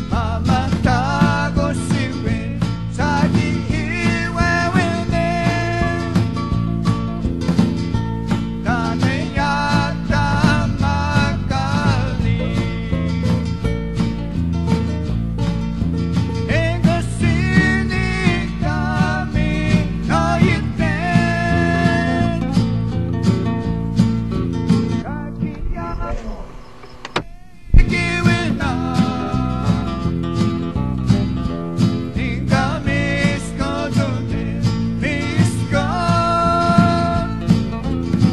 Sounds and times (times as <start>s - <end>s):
Gospel music: 0.0s - 38.3s.